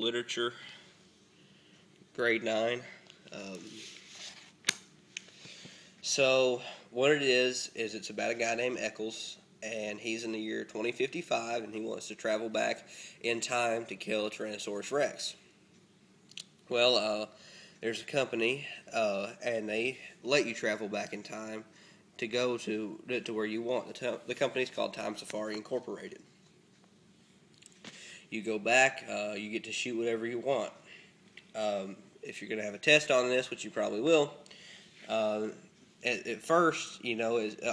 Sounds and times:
Speech: 0:00.0 - 0:00.7, 0:02.2 - 0:03.9, 0:06.0 - 0:15.4, 0:16.7 - 0:26.3, 0:28.3 - 0:30.8, 0:31.5 - 0:34.4, 0:35.1 - 0:37.7.

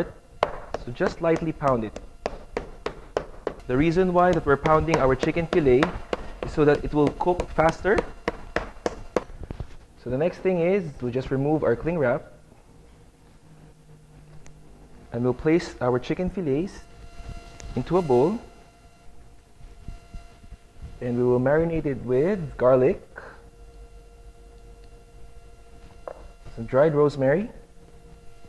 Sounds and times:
Speech: 0:00.8 - 0:02.0, 0:03.7 - 0:05.9, 0:06.5 - 0:08.0, 0:10.0 - 0:12.4, 0:15.1 - 0:16.8, 0:17.8 - 0:18.5, 0:21.0 - 0:23.1, 0:26.5 - 0:27.6.

